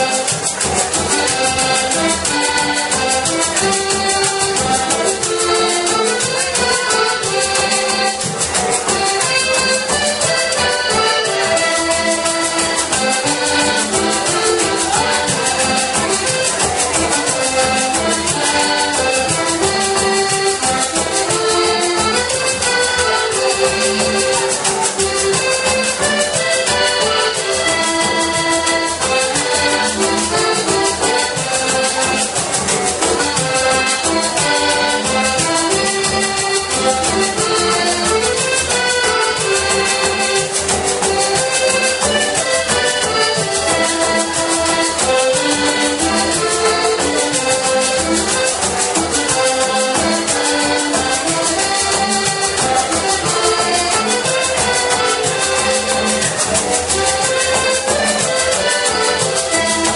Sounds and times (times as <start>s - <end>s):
Accordion: 0.0s - 59.9s.